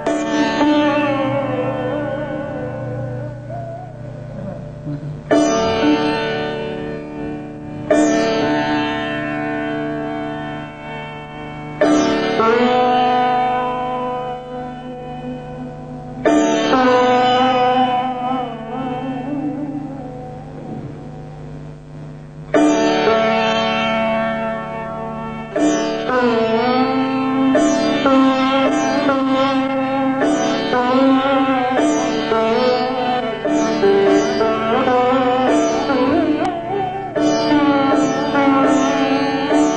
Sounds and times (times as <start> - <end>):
Music: 0.0 - 39.7.